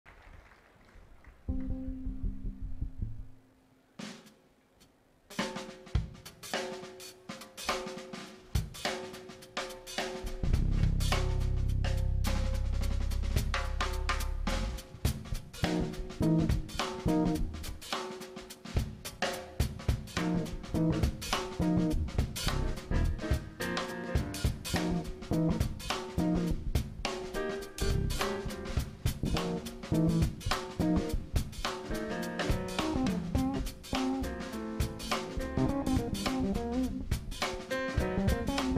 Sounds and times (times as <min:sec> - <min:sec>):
Bass drum: 0:01.5 - 0:03.4, 0:10.2 - 0:17.8, 0:19.6 - 0:38.7
Rimshot: 0:07.7 - 0:38.7.